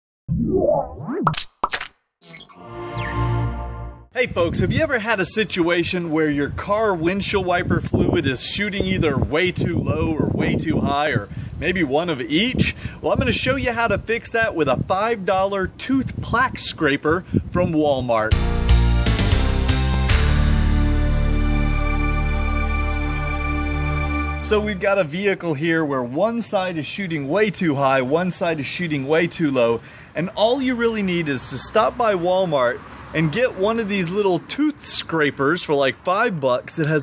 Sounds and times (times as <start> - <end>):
Speech: 4.2 - 18.3, 24.4 - 37.0.